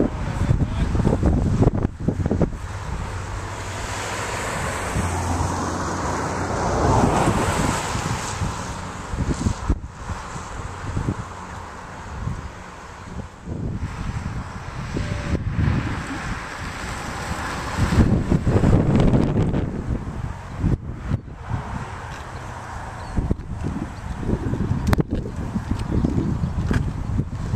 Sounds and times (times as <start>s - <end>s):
Wind noise (microphone): 0.0s - 11.4s, 12.0s - 27.5s.